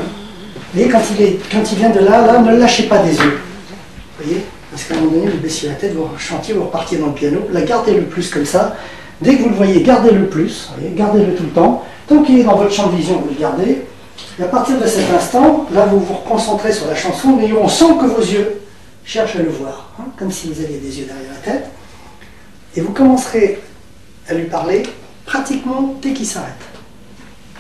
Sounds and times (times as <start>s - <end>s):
Speech: 0.0s - 21.8s, 22.7s - 26.8s.